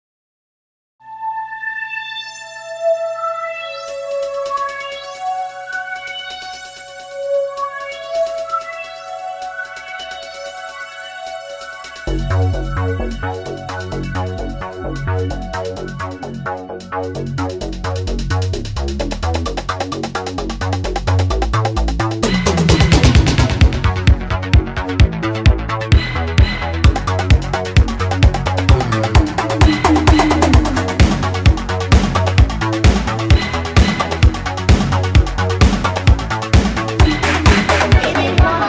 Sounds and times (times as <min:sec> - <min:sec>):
Music: 0:01.0 - 0:38.6.